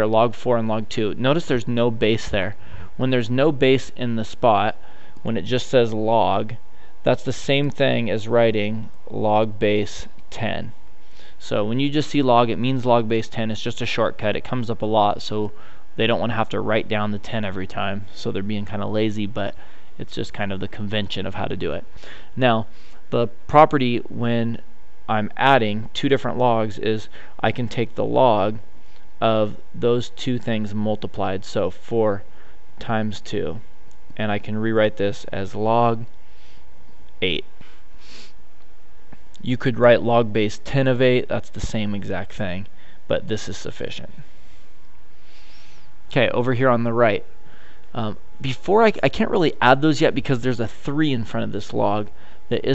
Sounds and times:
Speech: 0.0 - 10.8, 11.4 - 28.6, 29.2 - 33.6, 34.2 - 36.1, 37.2 - 37.5, 39.4 - 44.2, 46.1 - 47.3, 48.0 - 52.7.

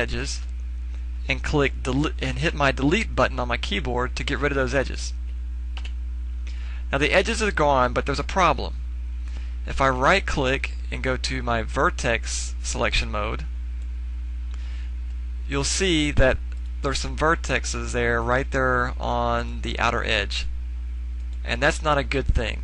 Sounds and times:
Speech: 0.0 - 0.5, 1.2 - 5.2, 6.9 - 8.8, 9.7 - 13.5, 15.5 - 20.5, 21.4 - 22.6.

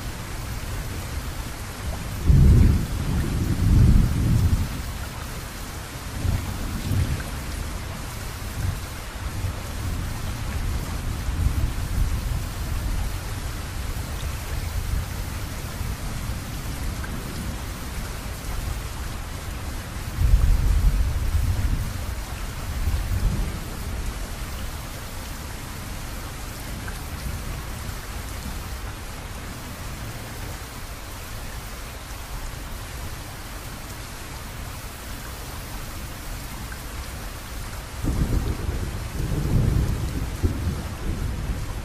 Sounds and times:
Rain on surface: 0.0 - 41.8
Raindrop: 0.0 - 41.8
Thunder: 2.2 - 4.7, 38.0 - 41.8.

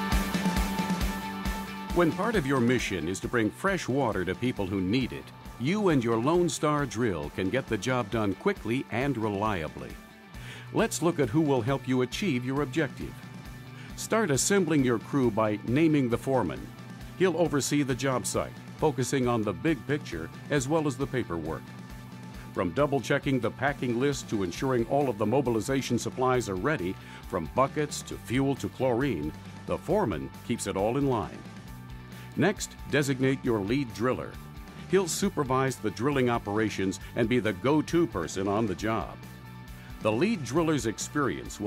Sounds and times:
Music: 0.0 - 41.6
Speech: 2.0 - 10.0, 10.7 - 13.2, 14.0 - 21.6, 22.6 - 31.4, 32.4 - 39.2, 40.0 - 41.6.

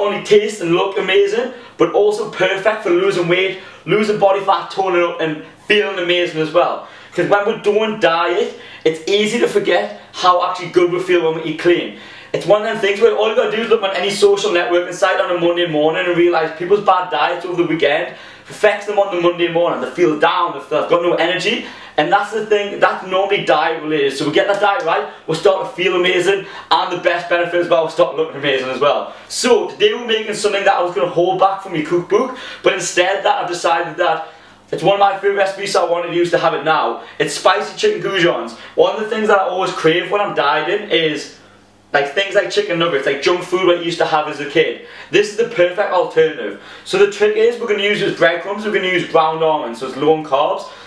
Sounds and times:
Speech: 0.0 - 50.8.

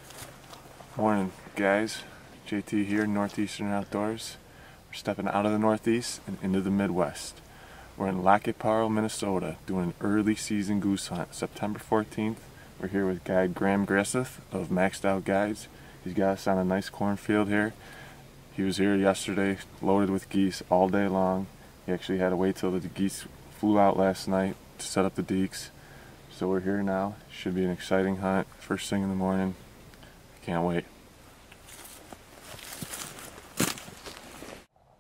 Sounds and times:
Speech: 1.0 - 7.4, 8.0 - 17.8, 18.5 - 29.6, 30.4 - 30.9.

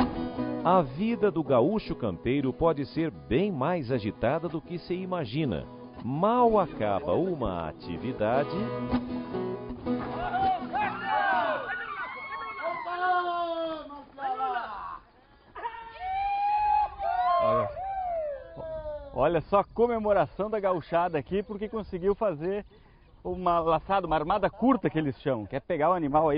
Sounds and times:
Speech: 0.7 - 8.7, 18.6 - 22.6, 23.3 - 26.3.

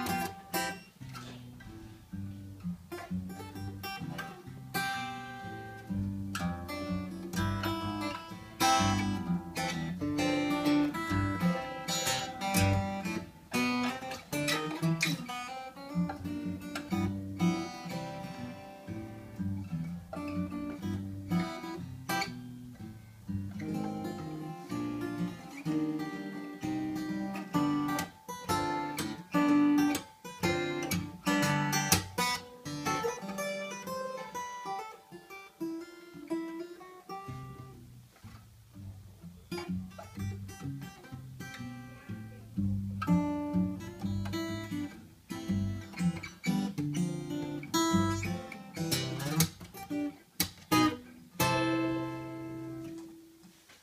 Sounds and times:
Music: 0.0 - 53.8.

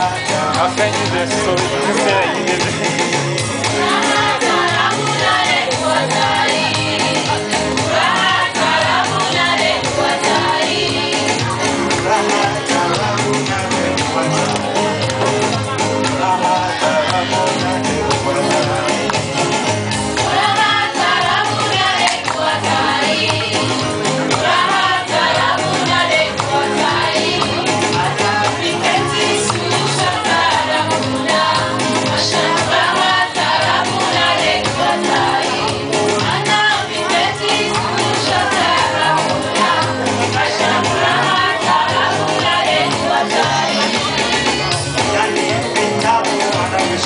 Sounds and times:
Gospel music: 0.0 - 47.0.

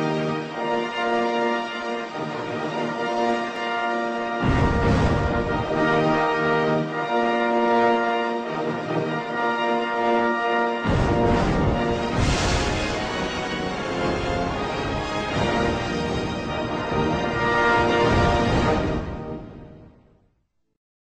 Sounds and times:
Music: 0.0 - 20.8.

